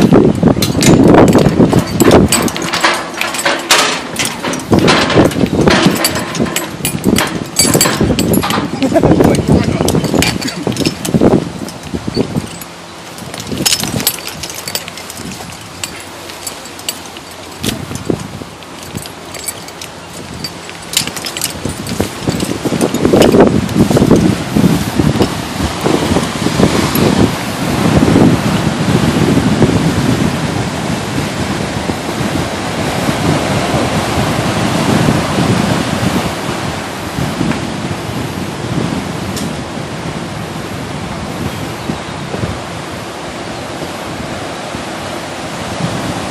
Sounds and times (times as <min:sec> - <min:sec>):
Ocean: 0:00.0 - 0:46.3
Outside, rural or natural: 0:00.0 - 0:46.3
Rustling leaves: 0:00.0 - 0:46.3
Speech: 0:08.6 - 0:10.6.